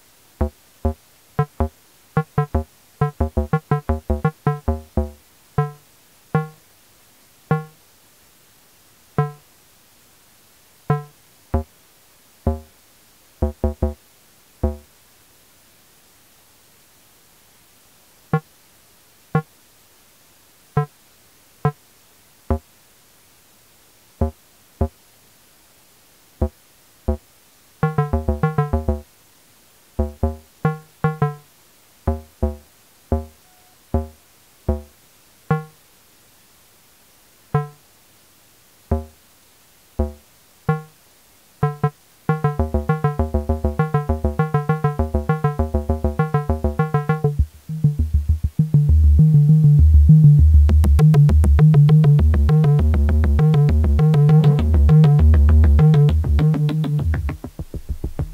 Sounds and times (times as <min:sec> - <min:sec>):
Music: 0:00.4 - 0:05.8, 0:06.4 - 0:06.6, 0:07.5 - 0:07.8, 0:09.2 - 0:09.4, 0:10.9 - 0:11.7, 0:12.5 - 0:12.7, 0:13.4 - 0:14.0, 0:14.6 - 0:14.9, 0:27.8 - 0:29.1, 0:30.0 - 0:31.5, 0:32.1 - 0:34.9, 0:35.5 - 0:35.8, 0:37.6 - 0:37.8, 0:38.9 - 0:39.2, 0:40.0 - 0:41.0, 0:41.6 - 0:58.3.